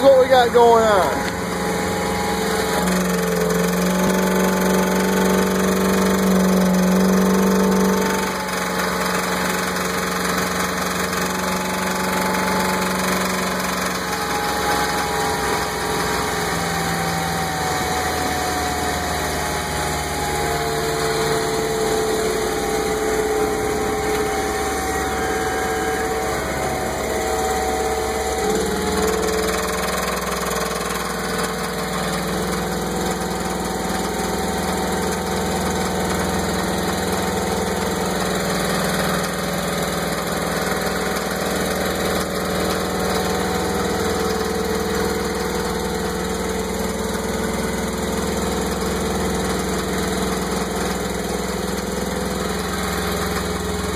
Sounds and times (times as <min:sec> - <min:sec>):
Medium engine (mid frequency): 0:00.0 - 0:53.9
Vehicle: 0:00.0 - 0:53.9.